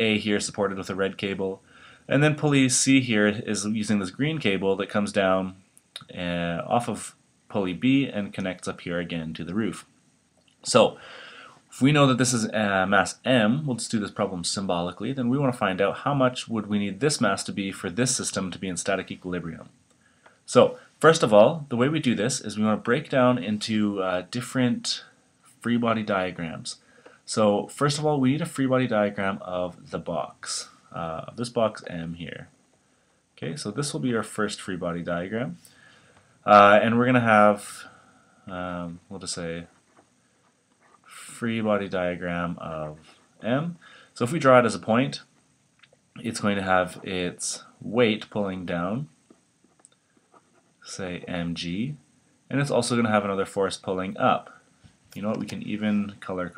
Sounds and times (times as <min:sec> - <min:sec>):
Speech: 0:00.0 - 0:09.9, 0:10.6 - 0:11.0, 0:11.7 - 0:19.8, 0:20.5 - 0:32.6, 0:33.4 - 0:35.6, 0:36.4 - 0:39.8, 0:41.0 - 0:45.3, 0:46.2 - 0:49.2, 0:50.8 - 0:54.6, 0:55.2 - 0:56.5.